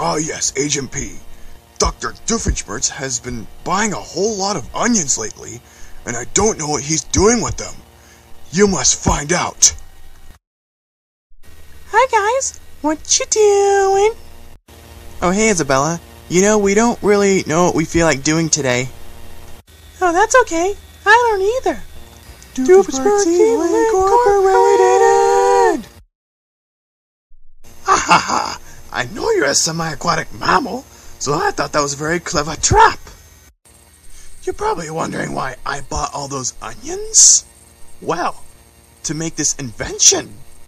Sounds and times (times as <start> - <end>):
Speech: 0.0 - 1.2, 1.8 - 7.8, 8.5 - 9.8, 11.9 - 14.2, 15.2 - 18.9, 20.0 - 21.8, 22.6 - 25.8, 28.3 - 33.2, 34.4 - 37.4, 38.0 - 38.4, 39.1 - 40.4.